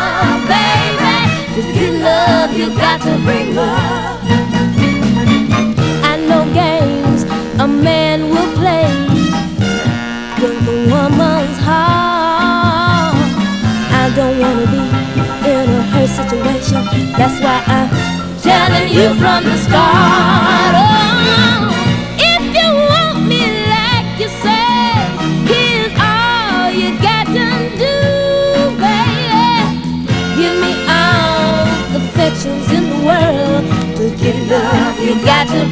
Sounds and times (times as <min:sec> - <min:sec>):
Music: 0:00.0 - 0:35.7.